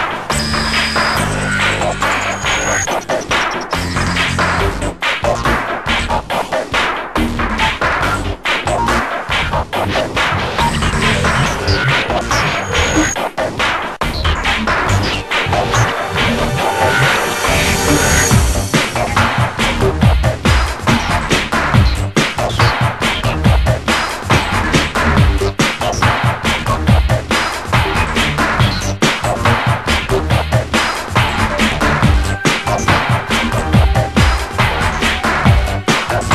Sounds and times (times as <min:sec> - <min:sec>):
Soundtrack music: 0:00.0 - 0:36.3.